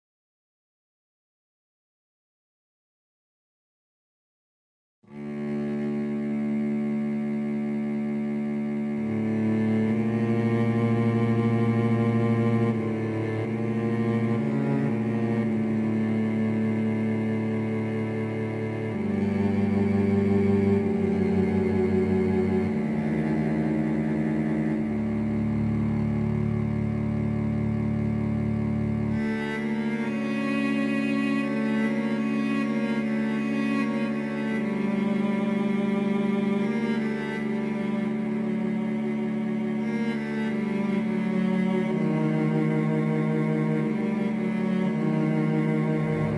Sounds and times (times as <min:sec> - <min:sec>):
Music: 0:05.1 - 0:46.3.